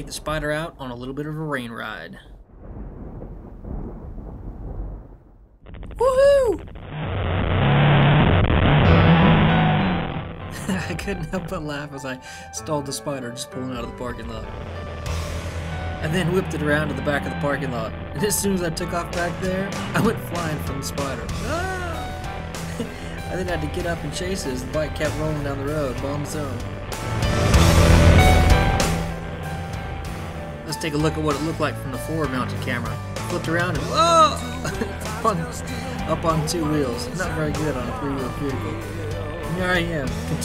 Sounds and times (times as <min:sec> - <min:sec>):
Speech: 0:00.0 - 0:02.3, 0:10.7 - 0:14.5, 0:16.0 - 0:22.1, 0:23.3 - 0:26.6, 0:30.7 - 0:38.8, 0:39.5 - 0:40.4
Music: 0:08.6 - 0:40.4.